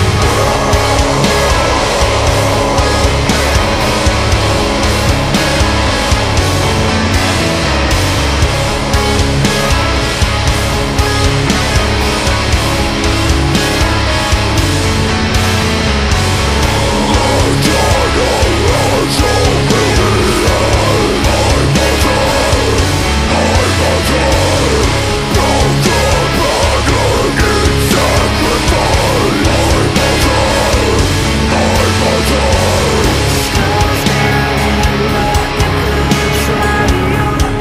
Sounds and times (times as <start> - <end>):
Music: 0.0 - 37.6.